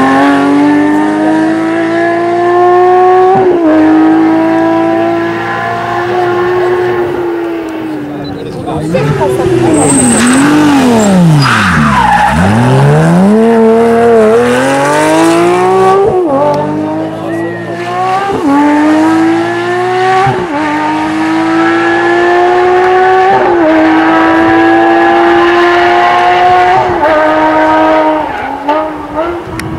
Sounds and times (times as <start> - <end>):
Hubbub, speech noise, speech babble: 7.7 - 10.5, 16.5 - 18.2.